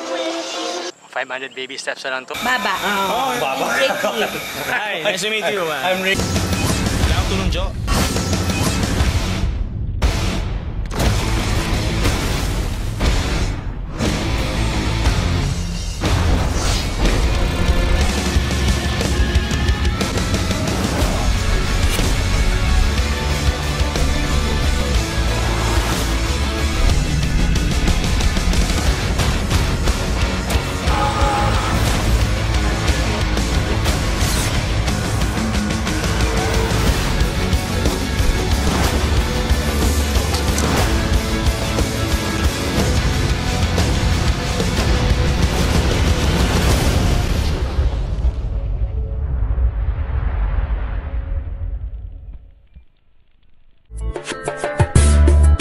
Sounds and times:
Music: 0.0s - 1.0s, 2.5s - 49.6s, 53.8s - 55.6s.

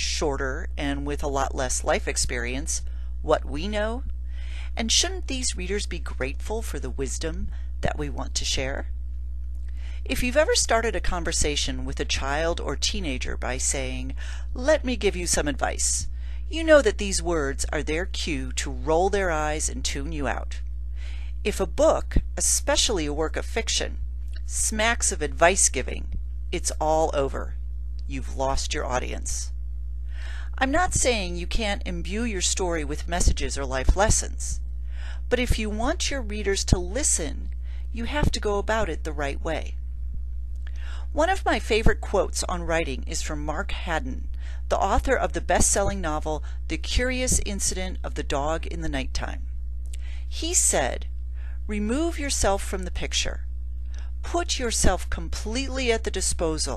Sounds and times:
Speech: 0.0s - 4.1s, 4.7s - 8.9s, 10.0s - 20.6s, 21.4s - 29.5s, 30.6s - 34.6s, 35.3s - 39.8s, 41.1s - 49.4s, 50.3s - 51.1s, 51.7s - 53.4s, 54.2s - 56.7s.

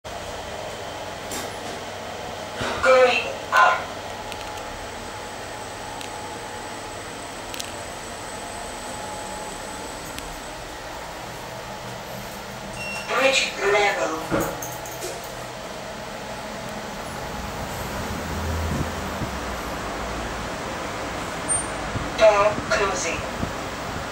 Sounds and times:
Speech: 2.6s - 3.9s, 13.1s - 14.4s, 22.2s - 23.4s.

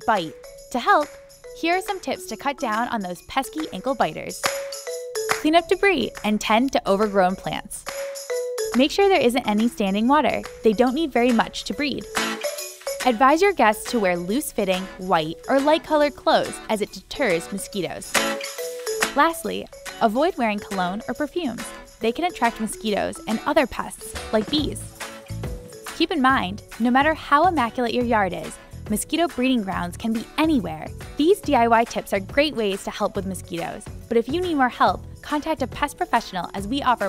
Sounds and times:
Speech: 0.0s - 4.4s, 5.4s - 7.9s, 8.8s - 12.1s, 13.0s - 18.1s, 19.2s - 24.9s, 26.0s - 37.0s
Music: 0.0s - 37.0s.

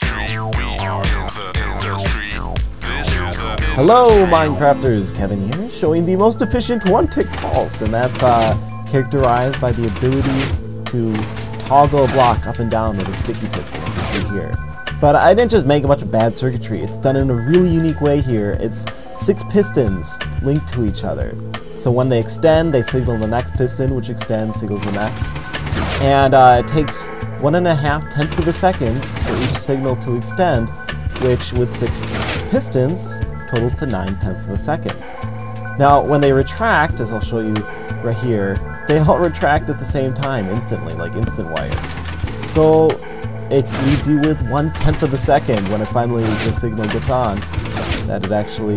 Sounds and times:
Speech: 0.0s - 25.3s, 25.9s - 35.0s, 35.8s - 41.9s, 42.5s - 48.7s
Music: 0.0s - 48.7s.

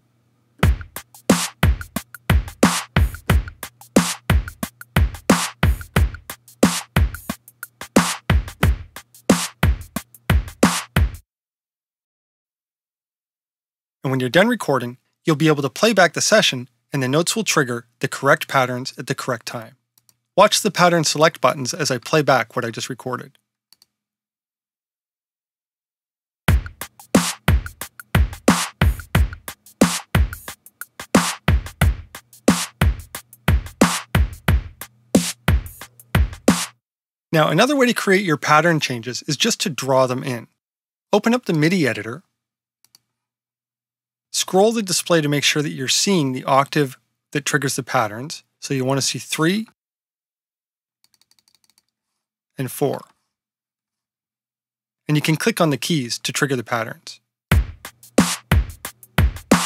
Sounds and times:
Drum machine: 0.6s - 11.2s, 26.5s - 36.8s, 57.6s - 59.6s.

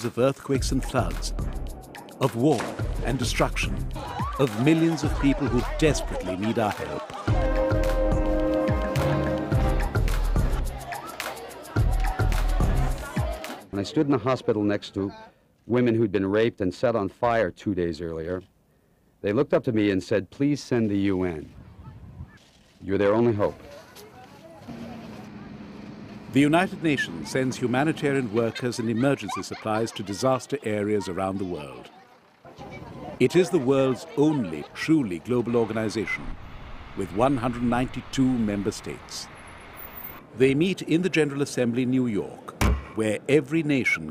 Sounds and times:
Speech: 0.0s - 1.4s, 2.2s - 7.1s, 26.4s - 36.3s, 37.0s - 39.3s.

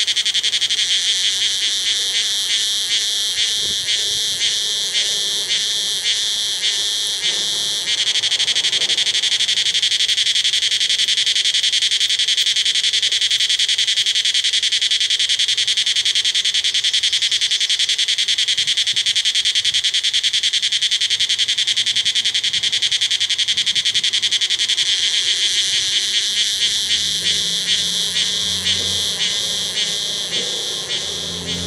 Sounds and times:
Insect: 0.0s - 31.6s.

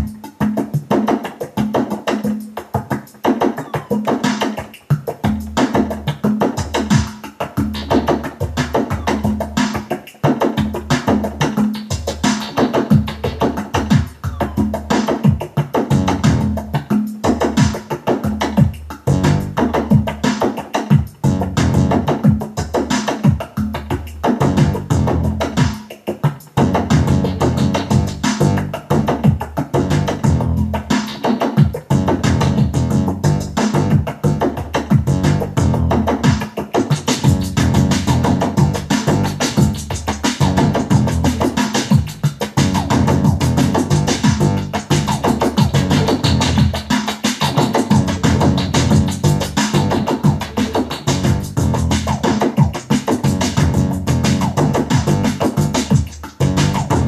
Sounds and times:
Percussion: 0.0s - 57.0s.

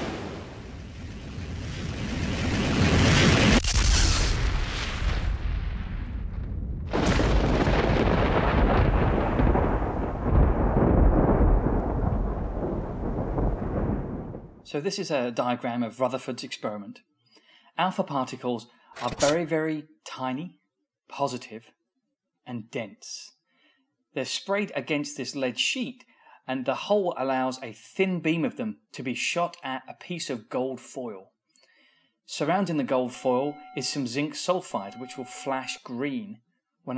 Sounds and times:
Outside, rural or natural: 0.0s - 14.6s.

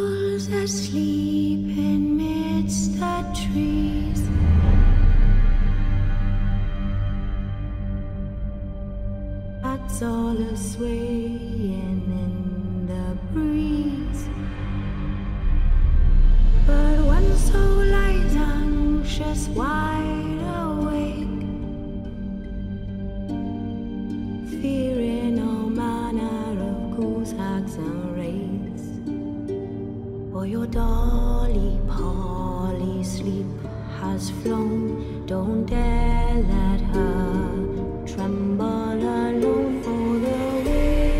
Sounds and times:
Lullaby: 0.0s - 41.1s.

